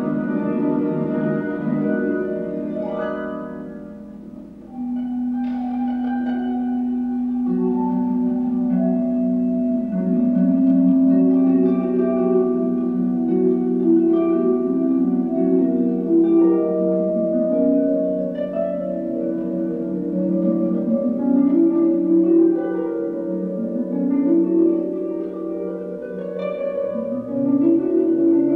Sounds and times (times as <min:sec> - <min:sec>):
Double bass: 0:00.0 - 0:28.5.